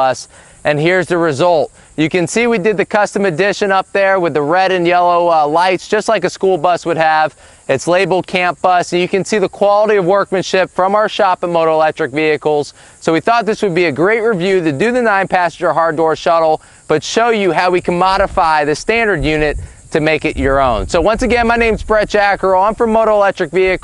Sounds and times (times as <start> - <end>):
Speech: 0.0 - 23.8.